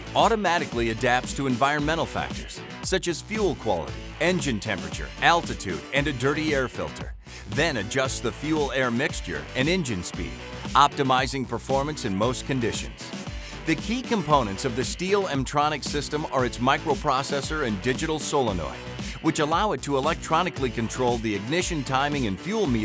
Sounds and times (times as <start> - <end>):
Music: 0.0 - 22.8
Speech: 0.2 - 22.8.